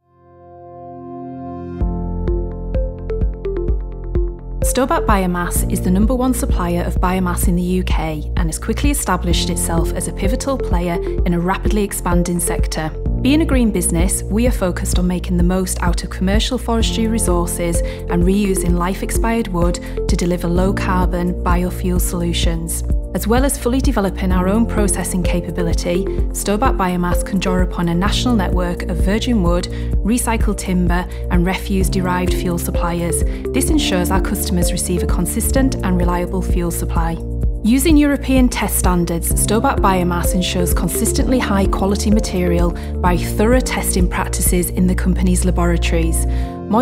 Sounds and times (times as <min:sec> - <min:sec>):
Music: 0:00.0 - 0:46.8
Speech: 0:04.7 - 0:46.8.